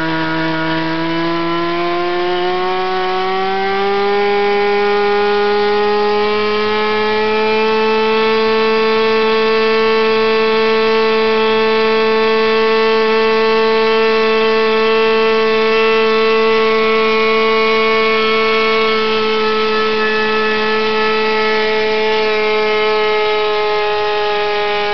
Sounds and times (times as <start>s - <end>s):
Accelerating, revving, vroom: 0.0s - 24.9s
Medium engine (mid frequency): 0.0s - 24.9s.